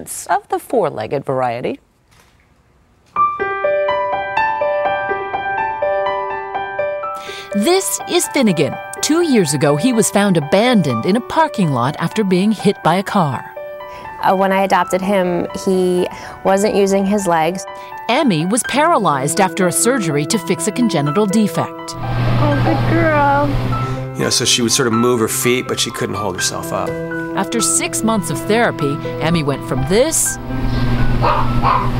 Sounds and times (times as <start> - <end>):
Music: 3.1 - 31.9.